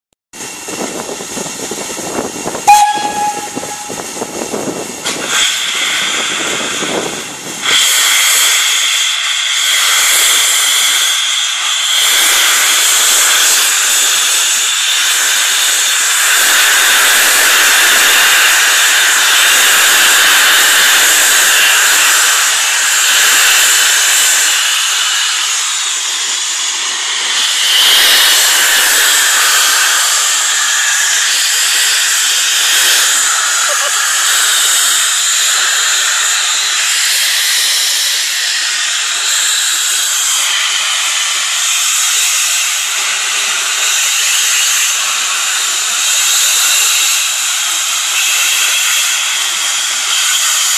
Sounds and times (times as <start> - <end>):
Hiss: 0.4 - 50.7
Steam whistle: 2.6 - 4.4, 26.9 - 47.3, 47.9 - 50.7
Train horn: 2.6 - 4.4
Train whistle: 2.6 - 4.4, 27.3 - 41.1, 48.0 - 50.7.